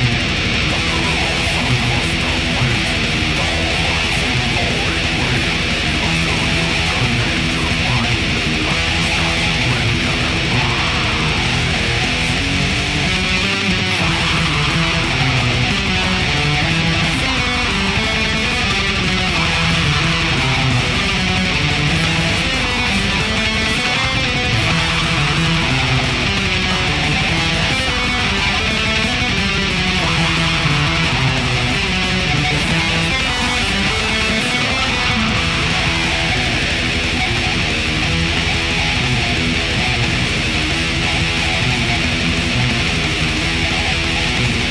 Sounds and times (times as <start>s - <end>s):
Electric guitar: 0.0s - 44.7s.